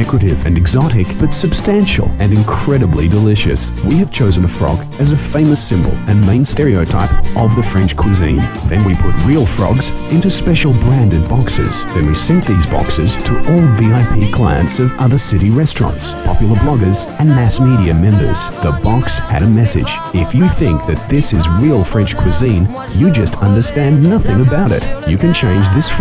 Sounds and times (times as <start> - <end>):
Music: 0.0 - 26.0
Speech: 0.0 - 26.0.